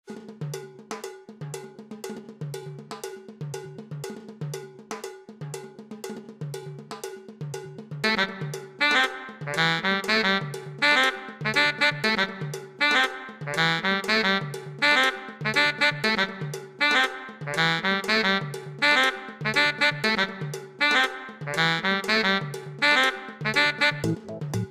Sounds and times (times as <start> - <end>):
Music: 0.0 - 24.7.